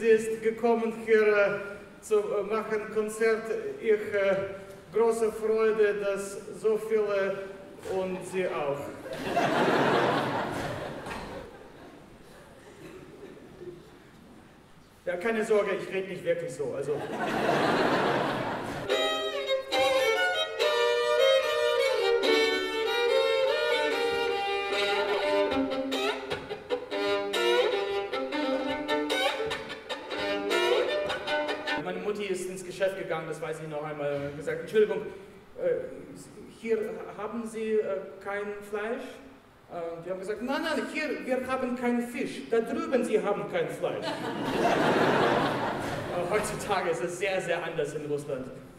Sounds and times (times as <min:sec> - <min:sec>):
Speech: 0:00.0 - 0:09.2, 0:15.0 - 0:17.0, 0:31.8 - 0:44.1, 0:46.1 - 0:48.6
Bowed string instrument: 0:18.6 - 0:32.2.